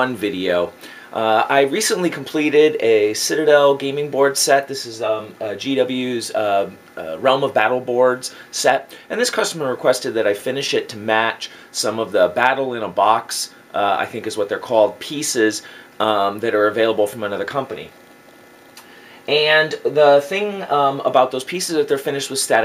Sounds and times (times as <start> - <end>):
Speech: 0.0 - 18.0, 19.3 - 22.6.